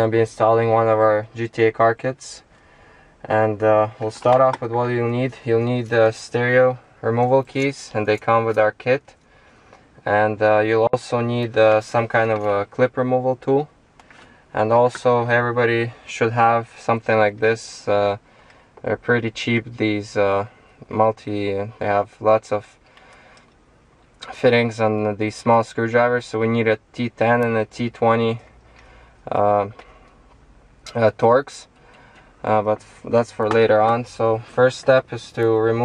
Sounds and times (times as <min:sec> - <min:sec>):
Speech: 0:00.0 - 0:02.5, 0:03.2 - 0:09.2, 0:10.0 - 0:13.7, 0:14.5 - 0:18.2, 0:18.8 - 0:22.8, 0:24.2 - 0:28.5, 0:29.3 - 0:29.8, 0:30.9 - 0:31.7, 0:32.4 - 0:35.8.